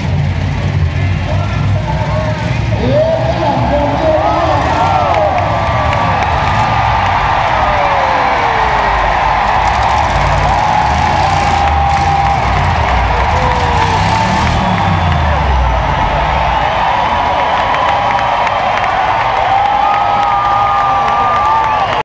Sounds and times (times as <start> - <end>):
Truck: 0.0 - 22.0.